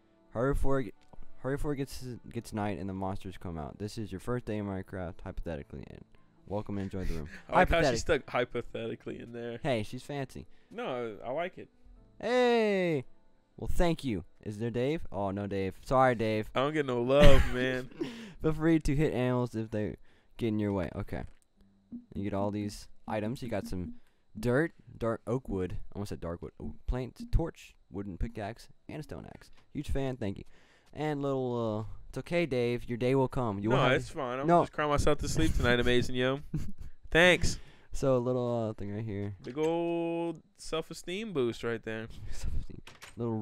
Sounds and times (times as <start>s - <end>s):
Speech: 0.4s - 21.4s, 22.2s - 36.4s, 37.2s - 43.4s.